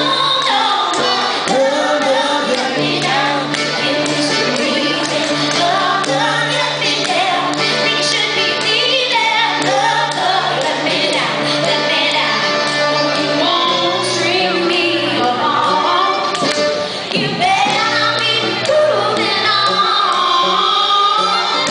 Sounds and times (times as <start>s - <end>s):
Music: 0.0s - 21.7s.